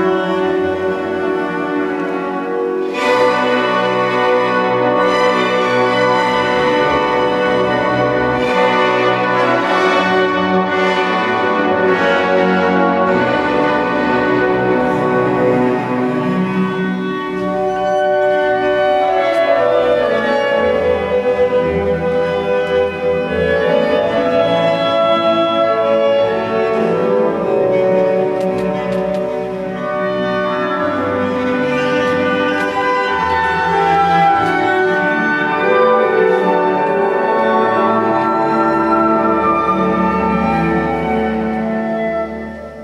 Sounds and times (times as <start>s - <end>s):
Cello: 0.0s - 42.8s
Classical music: 0.0s - 42.8s
Orchestra: 0.0s - 42.8s.